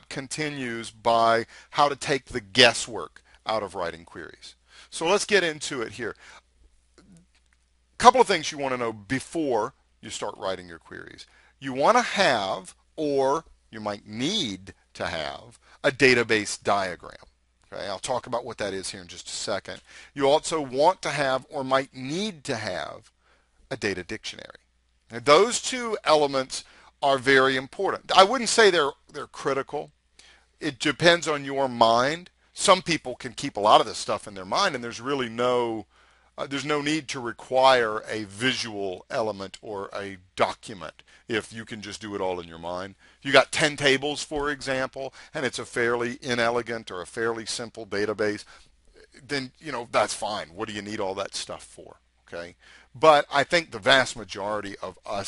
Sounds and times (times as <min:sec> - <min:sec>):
Speech: 0:00.0 - 0:06.2, 0:08.0 - 0:23.1, 0:23.7 - 0:29.9, 0:30.6 - 0:55.2.